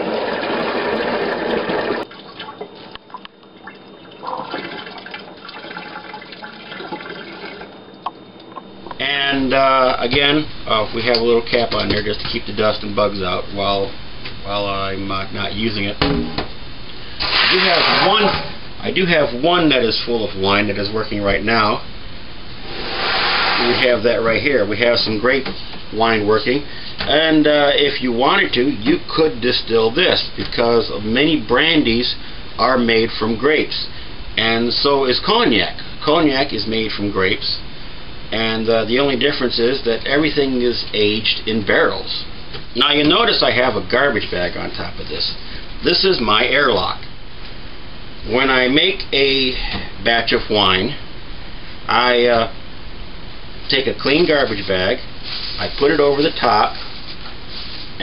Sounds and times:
Inside, small room: 0.0s - 58.0s
Speech: 9.0s - 16.0s, 17.5s - 21.9s, 23.6s - 37.6s, 38.3s - 47.1s, 48.2s - 51.0s, 51.9s - 52.6s, 53.7s - 56.8s.

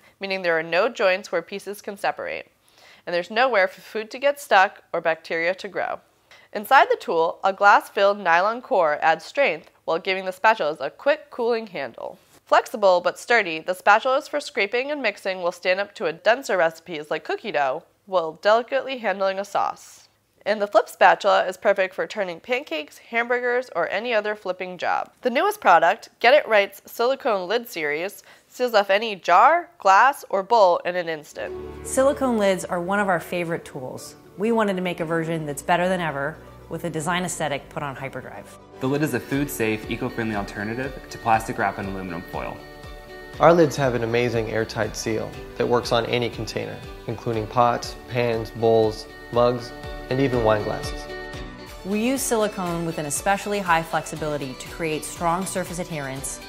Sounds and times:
Speech: 6.6s - 42.6s, 43.4s - 50.9s, 51.9s - 56.4s.

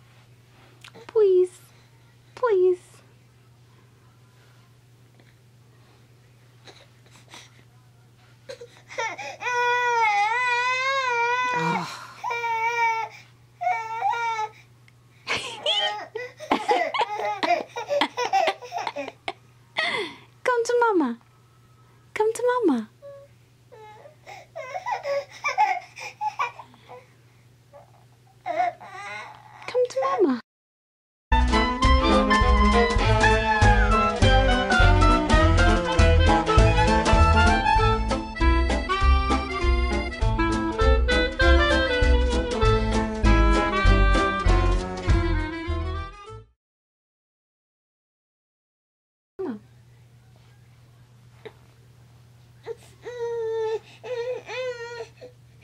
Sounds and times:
Chuckle, chortle: 15.3s - 20.2s.

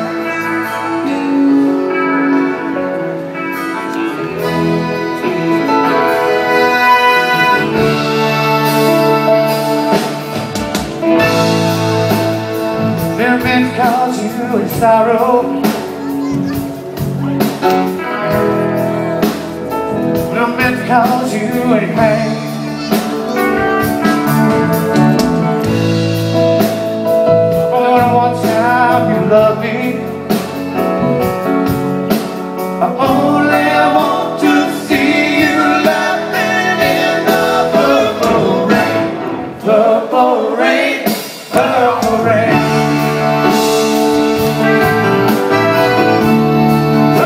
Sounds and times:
Bluegrass: 0.0s - 47.2s.

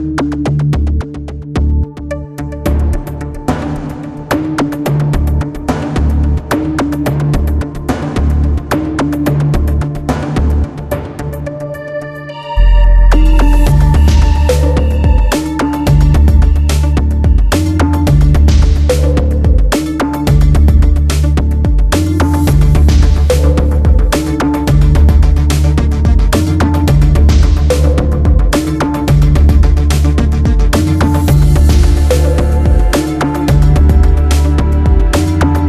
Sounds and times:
Rhythm and blues: 12.6s - 35.6s.

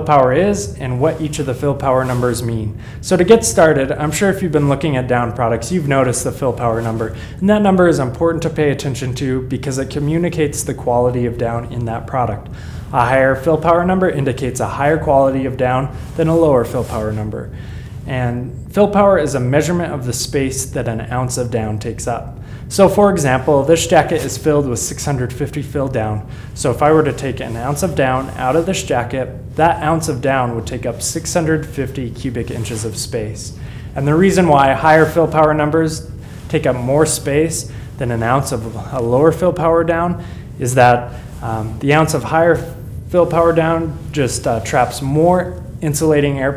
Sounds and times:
Speech: 0.0s - 46.5s.

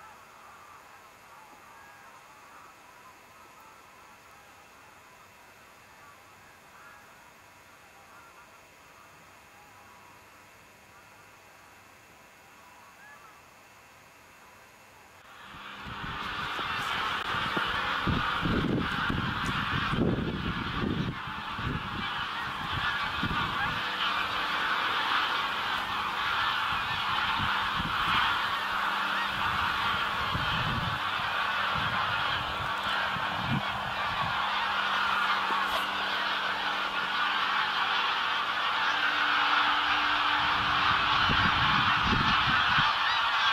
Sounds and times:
Honk: 0.0s - 10.0s, 12.6s - 13.5s, 15.5s - 43.5s.

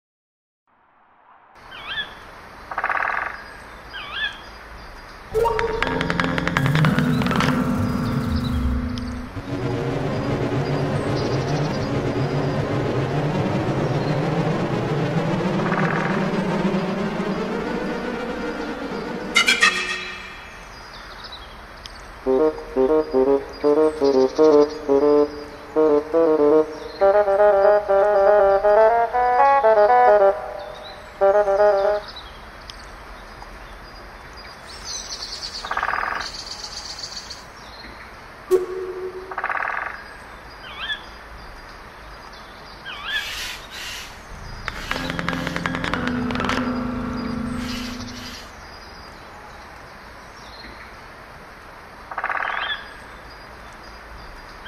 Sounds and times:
Frog: 2.7s - 4.4s, 35.6s - 37.3s, 39.3s - 40.1s, 52.1s - 53.0s
Music: 5.4s - 20.6s, 22.3s - 32.1s, 38.5s - 39.7s, 44.3s - 48.5s.

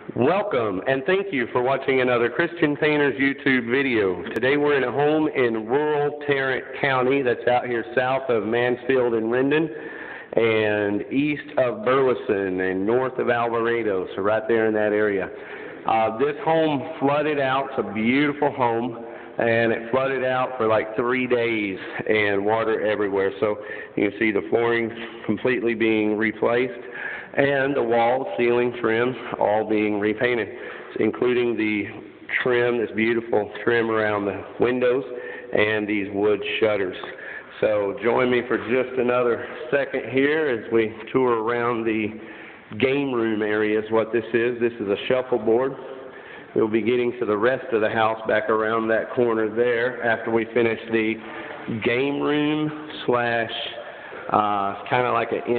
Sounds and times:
Speech: 0.0s - 45.9s, 46.5s - 55.5s.

